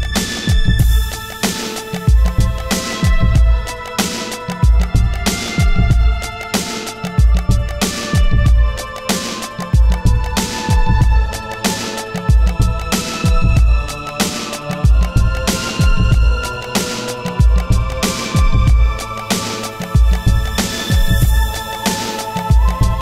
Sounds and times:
Music: 0:00.0 - 0:23.0.

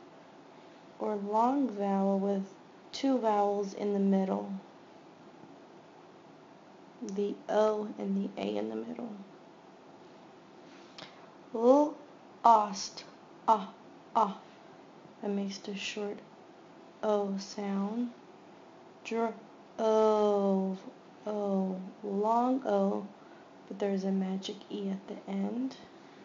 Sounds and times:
Speech: 0:01.0 - 0:04.6, 0:07.0 - 0:09.3, 0:11.6 - 0:14.5, 0:15.2 - 0:16.2, 0:17.0 - 0:18.2, 0:19.1 - 0:23.1, 0:23.7 - 0:25.9.

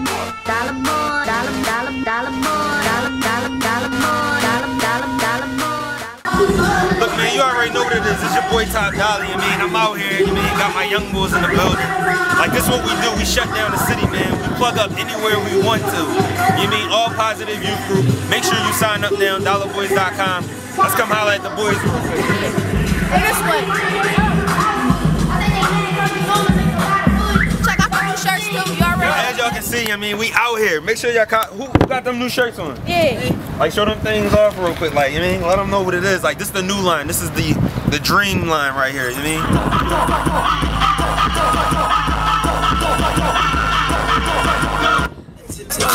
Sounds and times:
Music: 0:00.0 - 0:29.9, 0:39.4 - 0:45.9.

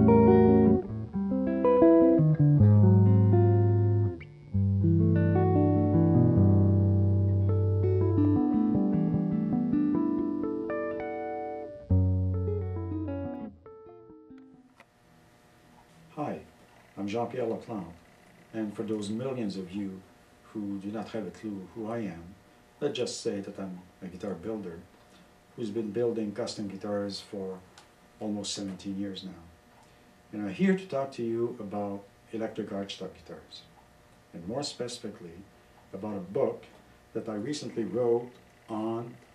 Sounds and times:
Speech: 0:16.1 - 0:24.9, 0:25.6 - 0:29.6, 0:30.3 - 0:33.7, 0:34.3 - 0:39.2.

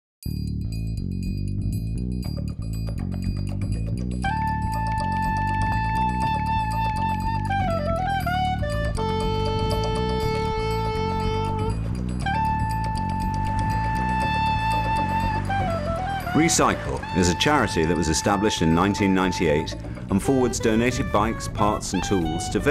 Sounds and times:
Music: 0:00.2 - 0:22.7
Speech: 0:16.4 - 0:22.7.

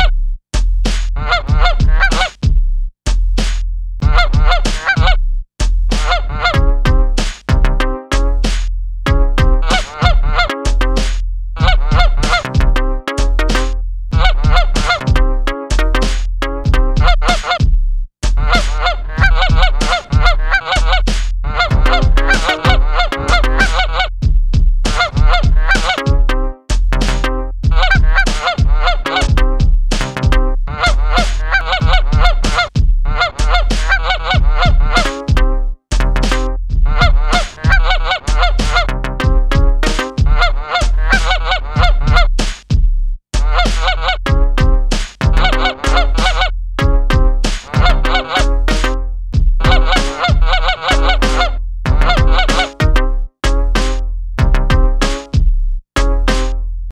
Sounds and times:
Honk: 0:01.2 - 0:02.4, 0:04.1 - 0:05.2, 0:06.0 - 0:06.6, 0:09.6 - 0:10.6, 0:11.6 - 0:12.6, 0:14.2 - 0:15.0, 0:17.0 - 0:17.6, 0:18.4 - 0:24.1, 0:24.9 - 0:26.0, 0:27.8 - 0:29.4, 0:30.7 - 0:35.2, 0:36.9 - 0:38.9, 0:40.3 - 0:42.3, 0:43.4 - 0:44.2, 0:45.4 - 0:46.5, 0:47.7 - 0:48.5, 0:49.7 - 0:53.0.

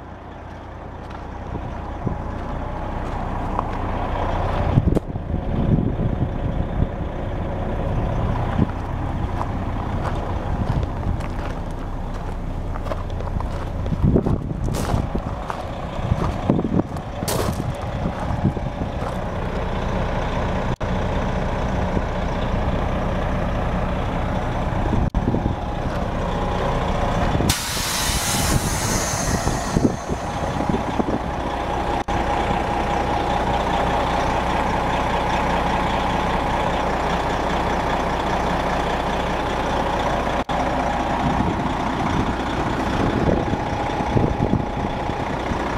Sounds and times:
Bus: 0:00.0 - 0:45.7.

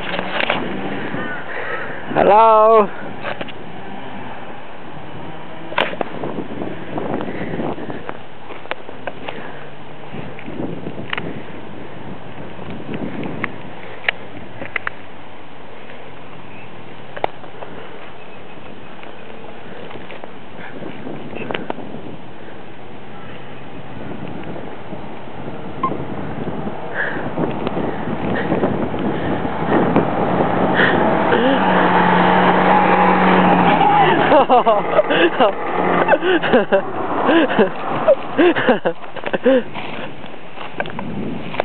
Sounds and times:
Speech: 0:02.2 - 0:03.0.

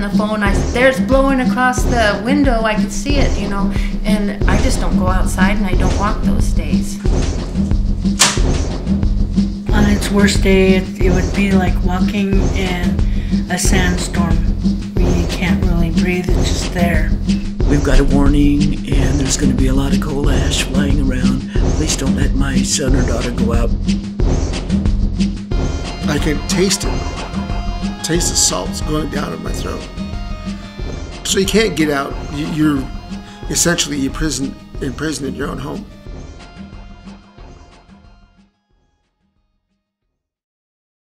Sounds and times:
Speech: 0:00.0 - 0:07.0, 0:09.7 - 0:23.7, 0:26.0 - 0:27.0, 0:28.0 - 0:29.9, 0:31.3 - 0:32.9, 0:33.5 - 0:35.8
Music: 0:00.0 - 0:40.4.

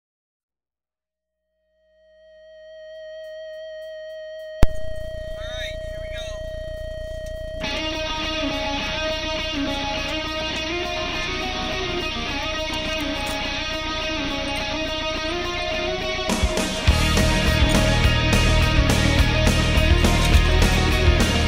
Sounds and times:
Speech: 0:05.2 - 0:06.4
Music: 0:07.6 - 0:21.4.

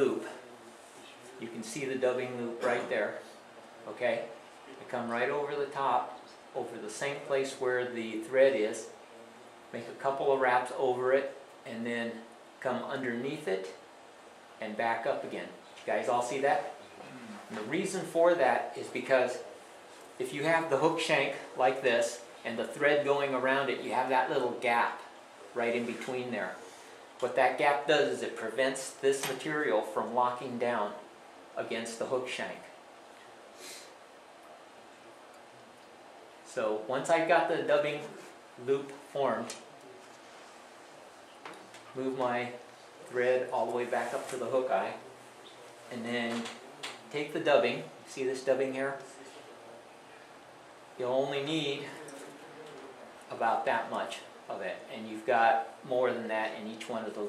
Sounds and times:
Speech: 0:00.0 - 0:13.8, 0:14.6 - 0:19.6, 0:20.2 - 0:32.8, 0:36.5 - 0:39.7, 0:42.0 - 0:45.1, 0:45.9 - 0:50.3, 0:51.0 - 0:57.2
Inside, small room: 0:00.0 - 0:57.2.

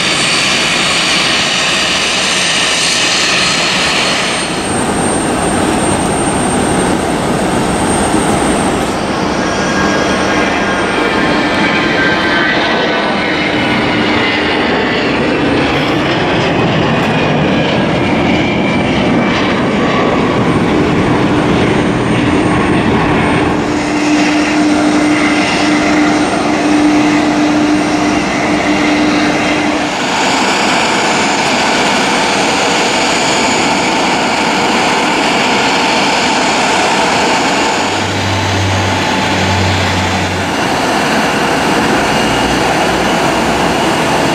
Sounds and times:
Fixed-wing aircraft, airplane: 0:00.0 - 0:44.3.

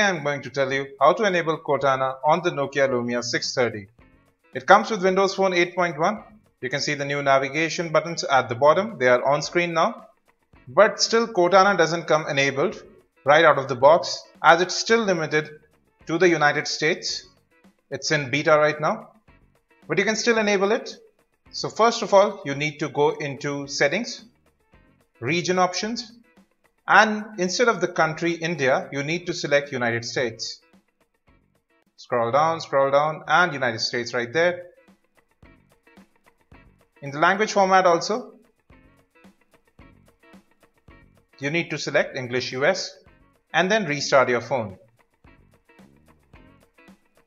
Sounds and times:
Speech: 0:00.0 - 0:03.9, 0:04.6 - 0:10.1, 0:10.7 - 0:17.2, 0:17.9 - 0:19.1, 0:19.9 - 0:21.0, 0:21.6 - 0:24.2, 0:25.2 - 0:26.1, 0:26.9 - 0:30.6, 0:32.0 - 0:34.6, 0:37.0 - 0:38.4, 0:41.4 - 0:43.0, 0:43.6 - 0:44.8.

